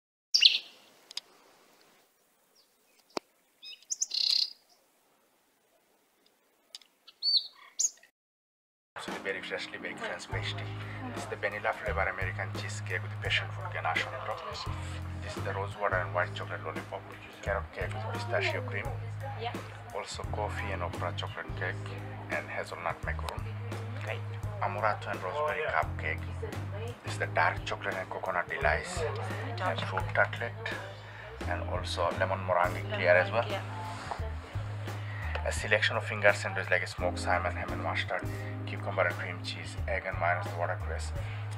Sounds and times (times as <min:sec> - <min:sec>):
Chirp, tweet: 0:00.4 - 0:00.8, 0:02.6 - 0:04.8, 0:07.1 - 0:08.1.